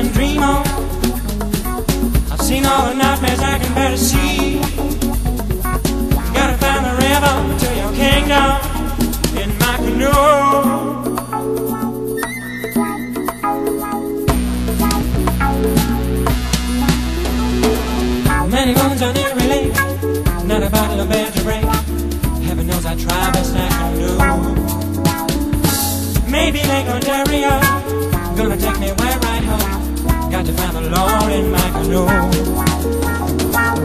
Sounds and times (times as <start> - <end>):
Music: 0.0 - 33.8.